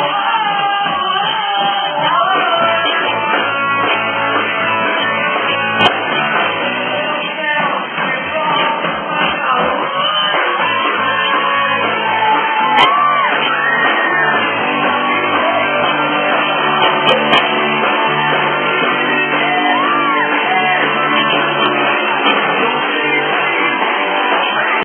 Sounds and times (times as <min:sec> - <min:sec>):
Music: 0:00.0 - 0:24.8.